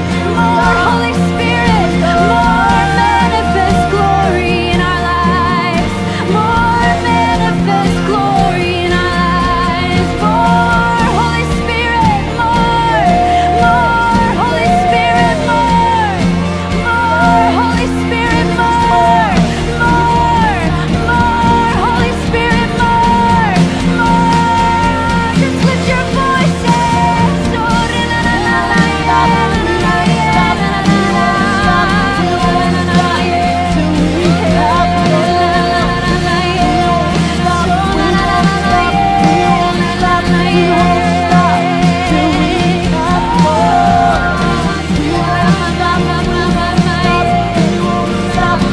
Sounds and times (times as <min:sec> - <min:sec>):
Music: 0:00.0 - 0:48.7.